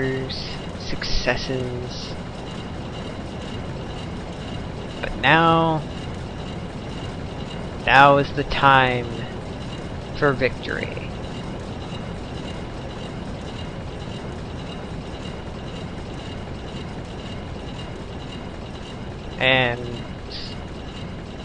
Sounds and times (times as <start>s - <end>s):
Speech: 0.0s - 2.2s, 5.0s - 5.9s, 7.9s - 9.3s, 10.2s - 11.1s, 19.4s - 20.5s.